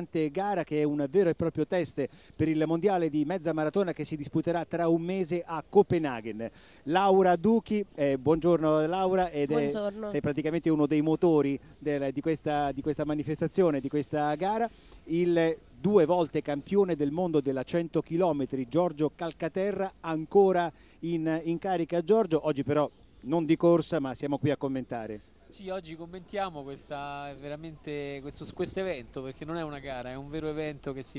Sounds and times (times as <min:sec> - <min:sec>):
Outside, rural or natural: 0:00.0 - 0:31.1
Speech: 0:00.0 - 0:31.1.